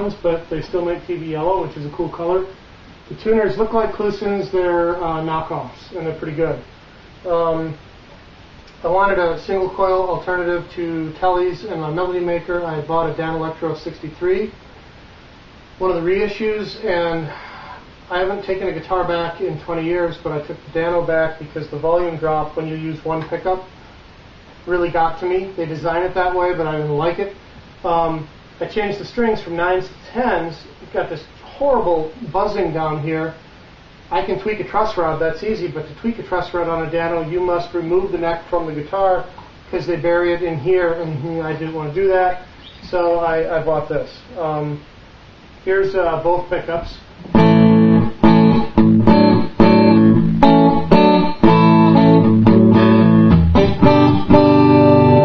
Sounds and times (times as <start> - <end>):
Speech: 0.0 - 7.8, 8.8 - 14.6, 15.8 - 17.4, 18.1 - 23.7, 24.6 - 33.4, 34.1 - 44.9, 45.6 - 47.2.